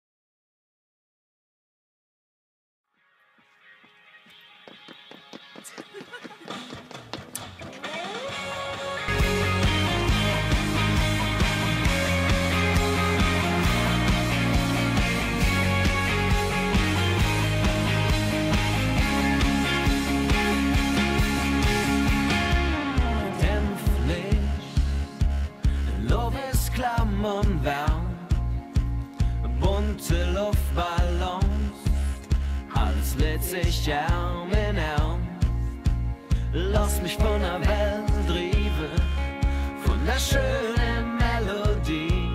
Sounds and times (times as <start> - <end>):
Music: 2.9 - 42.3.